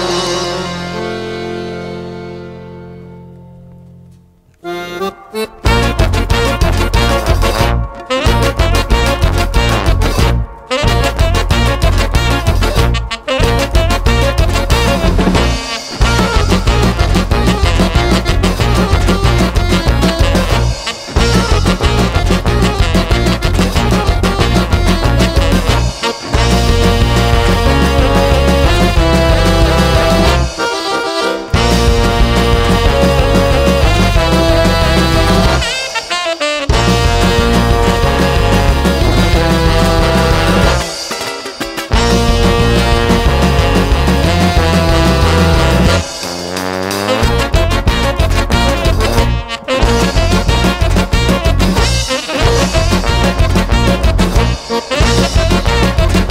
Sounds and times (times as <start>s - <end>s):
Ska: 0.0s - 3.2s, 4.5s - 56.3s
Orchestra: 0.0s - 56.3s.